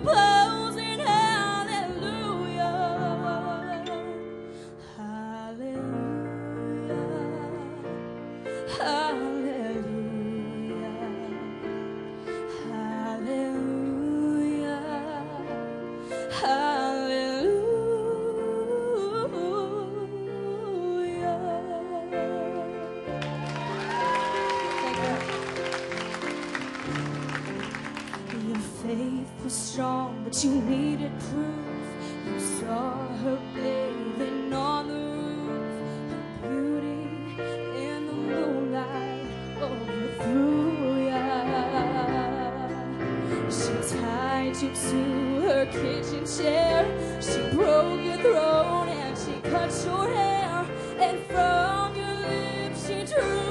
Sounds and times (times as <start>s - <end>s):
Female singing: 0.0s - 4.2s, 5.0s - 8.0s, 8.6s - 11.6s, 12.5s - 15.6s, 16.2s - 23.1s, 28.4s - 53.5s
Music: 0.0s - 53.5s.